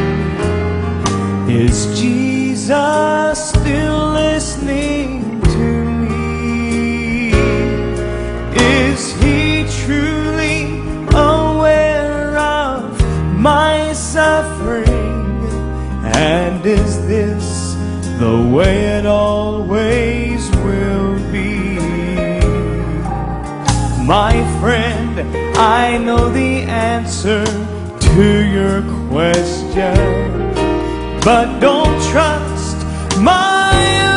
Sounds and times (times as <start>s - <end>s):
Tender music: 0.0s - 34.1s.